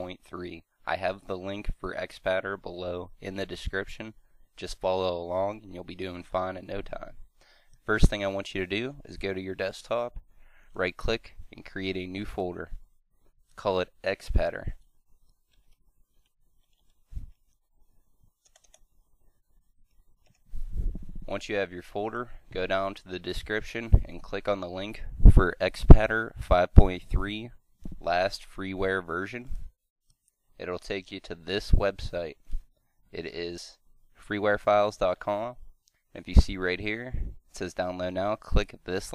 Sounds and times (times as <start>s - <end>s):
Speech: 0.0s - 7.2s, 7.9s - 10.2s, 10.8s - 12.8s, 13.6s - 14.8s, 21.3s - 29.6s, 30.6s - 32.4s, 33.1s - 39.1s.